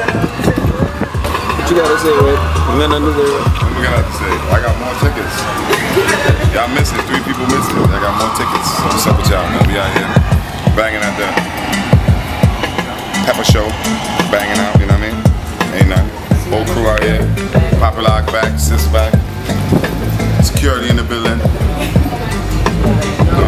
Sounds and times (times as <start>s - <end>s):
Music: 0.0s - 23.4s
Speech: 1.5s - 5.4s, 6.4s - 11.4s, 13.3s - 19.2s, 20.4s - 21.9s.